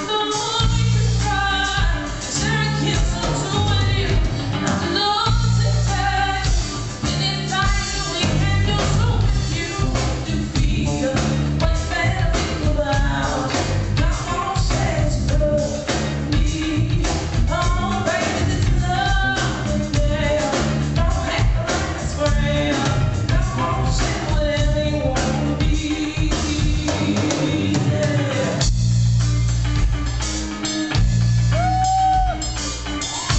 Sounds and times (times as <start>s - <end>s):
Music: 0.0s - 33.3s.